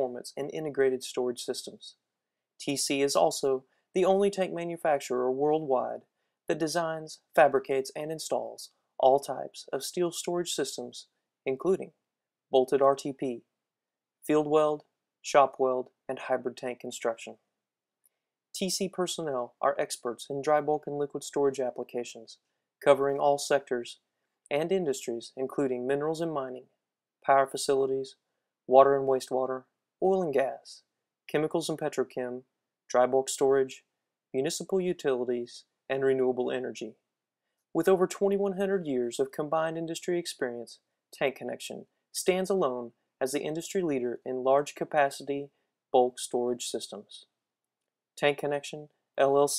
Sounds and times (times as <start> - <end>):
Speech: 0.0 - 2.0, 2.6 - 13.5, 14.2 - 17.4, 18.6 - 26.7, 27.3 - 37.0, 37.8 - 47.3, 48.2 - 49.5.